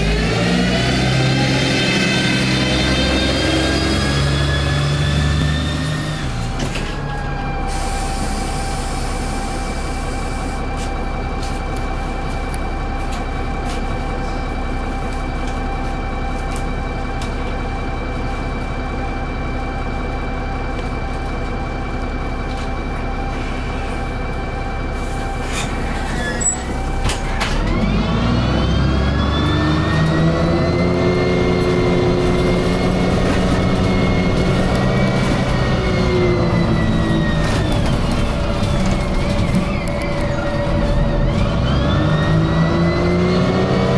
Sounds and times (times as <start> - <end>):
Fire engine, fire truck (siren): 0.0 - 43.9.